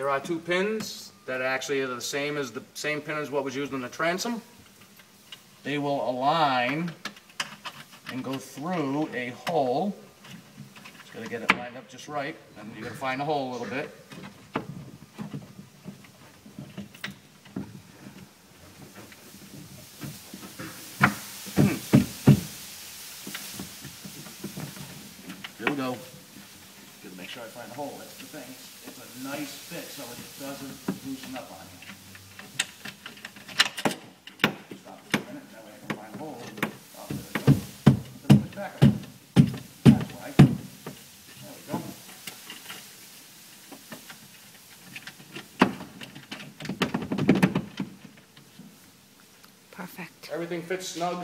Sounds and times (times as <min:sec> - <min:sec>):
Speech: 0:00.0 - 0:04.4, 0:05.7 - 0:07.0, 0:08.1 - 0:10.0, 0:11.2 - 0:14.0, 0:25.6 - 0:26.1, 0:27.0 - 0:31.8, 0:34.8 - 0:37.6, 0:39.9 - 0:40.4, 0:49.8 - 0:51.2.